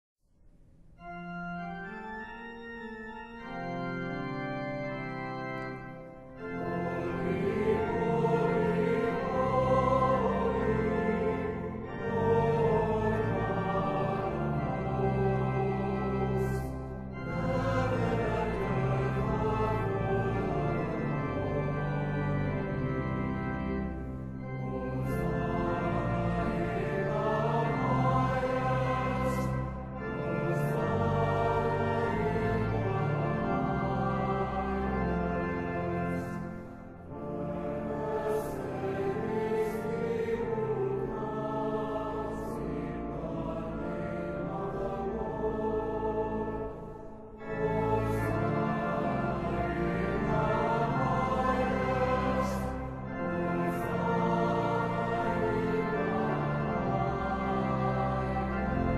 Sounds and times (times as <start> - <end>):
Organ: 0.8 - 58.9.